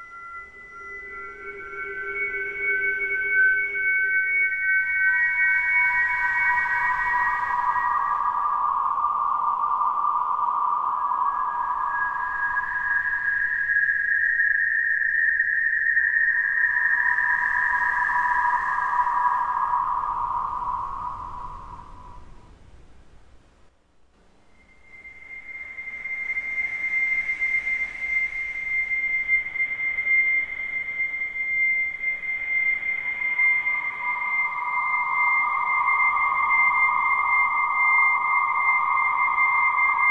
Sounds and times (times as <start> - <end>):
Music: 0.0 - 22.0, 24.5 - 40.1.